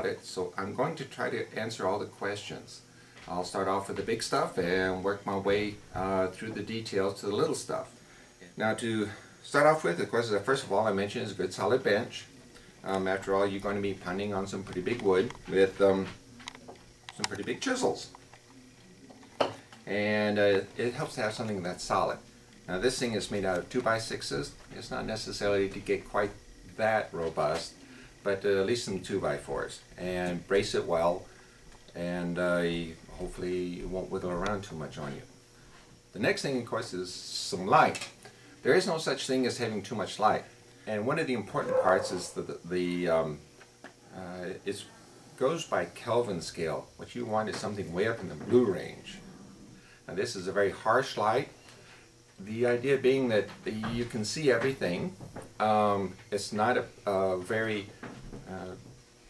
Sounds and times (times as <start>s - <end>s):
Speech: 0.0s - 16.2s, 17.1s - 18.2s, 19.8s - 31.3s, 31.9s - 35.3s, 36.1s - 43.4s, 44.1s - 49.2s, 50.1s - 51.6s, 52.4s - 58.9s.